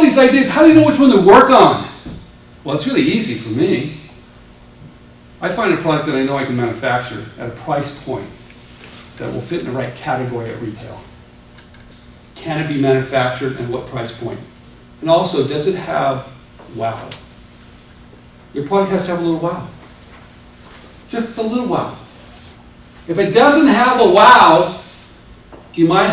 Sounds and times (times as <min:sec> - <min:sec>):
Speech: 0:00.0 - 0:02.0, 0:02.6 - 0:04.1, 0:05.4 - 0:08.4, 0:09.2 - 0:11.1, 0:12.4 - 0:17.2, 0:18.5 - 0:19.8, 0:21.1 - 0:22.1, 0:23.1 - 0:24.9, 0:25.7 - 0:26.1.